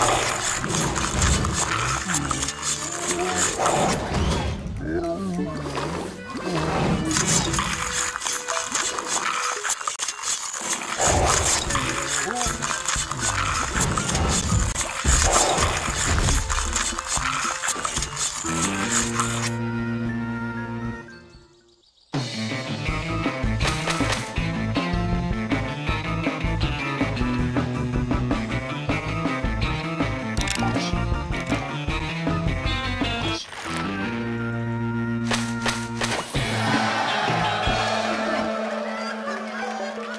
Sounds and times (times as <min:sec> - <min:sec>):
Music: 0:00.0 - 0:40.1.